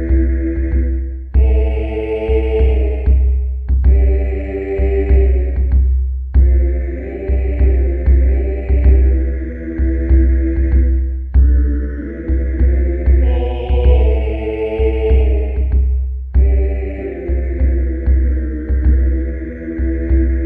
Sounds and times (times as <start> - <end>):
Music: 0.0 - 20.4.